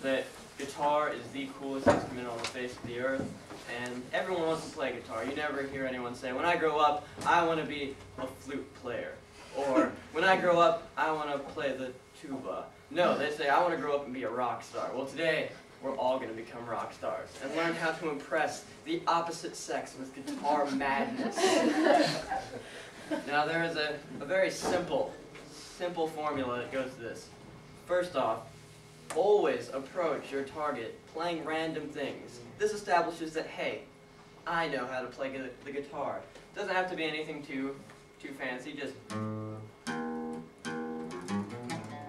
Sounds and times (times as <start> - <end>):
Speech: 0.0 - 21.3, 23.3 - 25.2, 25.8 - 28.5, 29.1 - 39.0.